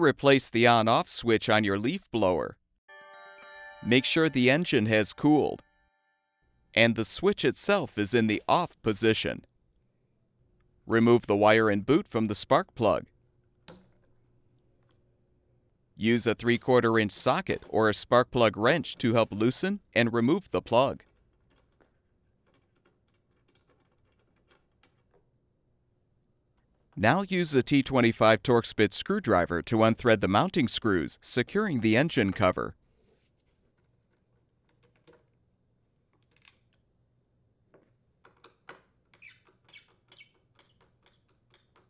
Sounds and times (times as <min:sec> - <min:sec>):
Speech: 0:00.0 - 0:02.6, 0:03.8 - 0:05.6, 0:06.8 - 0:09.5, 0:10.9 - 0:13.1, 0:16.0 - 0:21.0, 0:27.0 - 0:32.8.